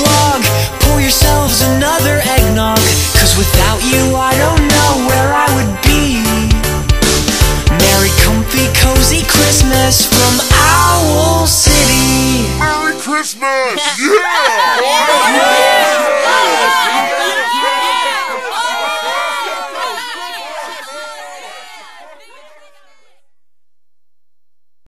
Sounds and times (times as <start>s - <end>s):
Speech: 12.6s - 17.4s.